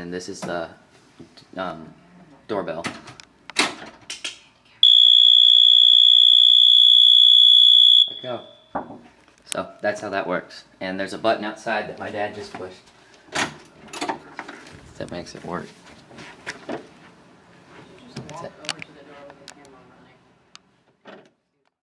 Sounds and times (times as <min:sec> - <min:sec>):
Speech: 0:09.5 - 0:12.8, 0:15.0 - 0:15.8, 0:17.9 - 0:20.3.